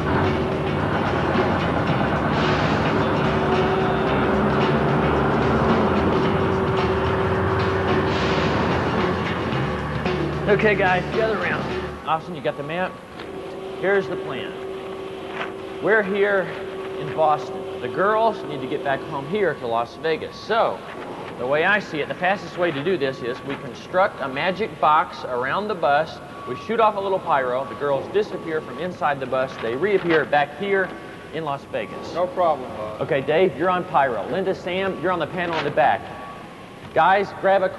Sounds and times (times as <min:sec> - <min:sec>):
Speech: 0:10.5 - 0:13.0, 0:13.8 - 0:14.6, 0:15.8 - 0:20.8, 0:21.4 - 0:36.1, 0:37.0 - 0:37.7.